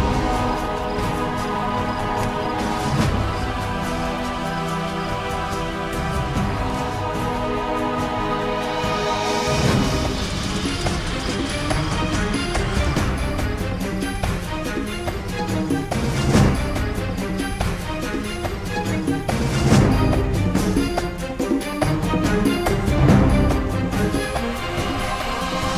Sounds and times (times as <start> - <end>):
Soundtrack music: 0.0 - 25.7.